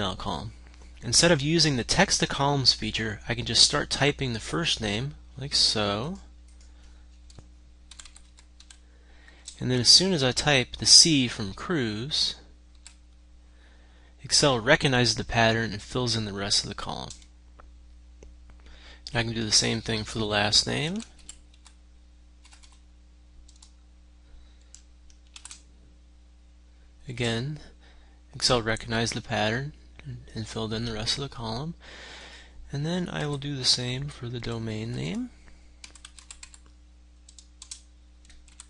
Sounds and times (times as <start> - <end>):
Speech: 0.0 - 6.3, 9.6 - 12.5, 14.2 - 17.2, 19.1 - 21.2, 27.0 - 27.7, 28.4 - 31.8, 32.7 - 35.4.